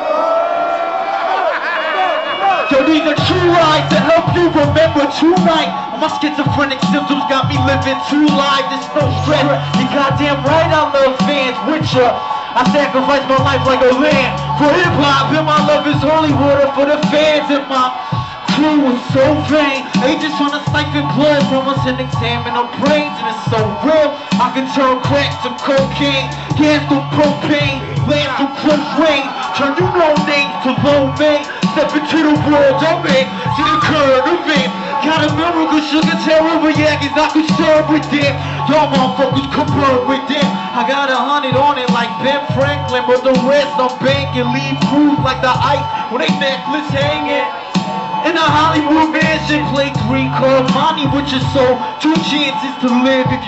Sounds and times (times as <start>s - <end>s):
Music: 0.0s - 53.4s.